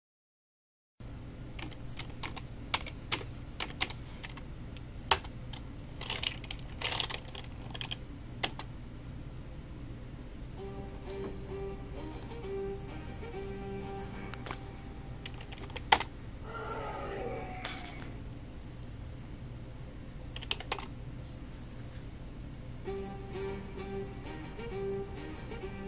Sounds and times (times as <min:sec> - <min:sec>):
Typing: 0:01.6 - 0:04.4, 0:15.2 - 0:16.1, 0:20.4 - 0:20.9
Music: 0:10.6 - 0:15.6, 0:22.8 - 0:25.8.